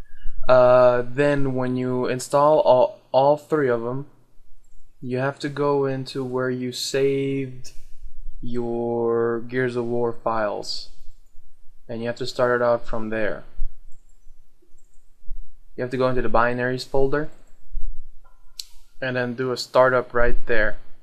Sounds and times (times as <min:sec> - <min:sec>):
Speech: 0:00.5 - 0:04.1, 0:05.0 - 0:07.7, 0:08.4 - 0:10.9, 0:11.9 - 0:13.5, 0:15.8 - 0:17.3, 0:19.0 - 0:20.8.